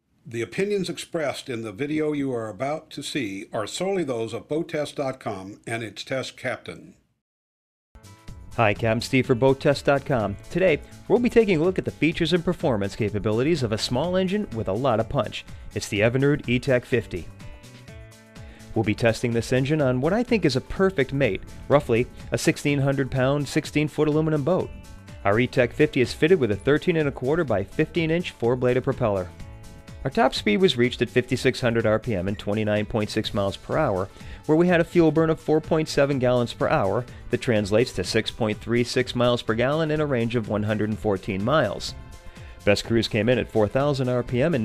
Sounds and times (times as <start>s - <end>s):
Speech: 0.3s - 7.0s, 8.6s - 17.3s, 18.7s - 29.3s, 30.1s - 42.0s, 42.7s - 44.6s
Music: 0.4s - 5.6s, 8.0s - 44.6s.